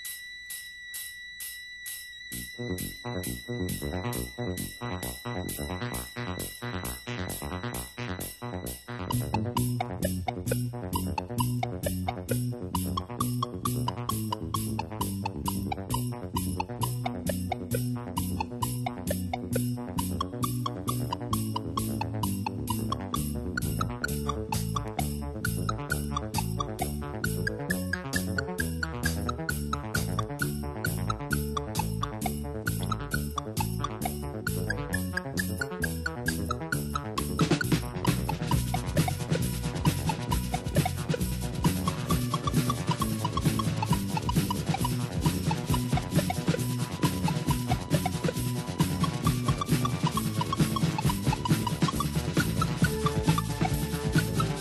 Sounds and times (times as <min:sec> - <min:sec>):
Music: 0:00.0 - 0:54.6.